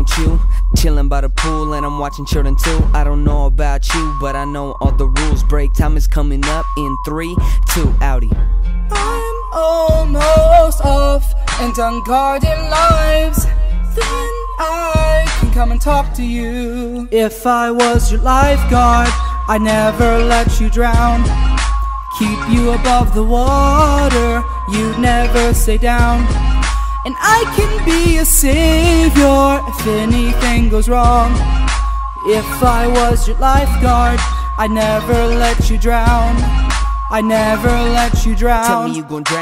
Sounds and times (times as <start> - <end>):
Music: 0.0 - 39.4.